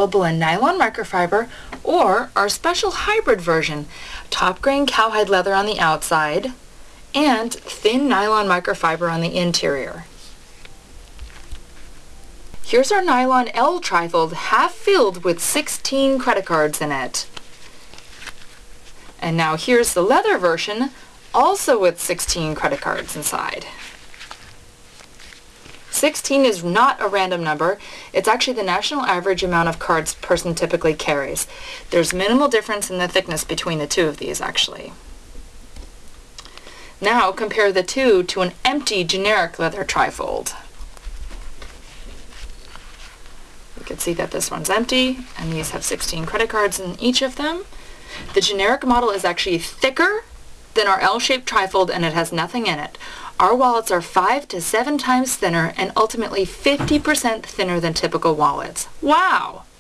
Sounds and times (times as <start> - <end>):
Speech: 0.0 - 6.6, 7.2 - 10.1, 12.6 - 17.3, 19.2 - 23.8, 25.9 - 35.0, 37.0 - 40.7, 43.8 - 47.7, 48.3 - 59.7.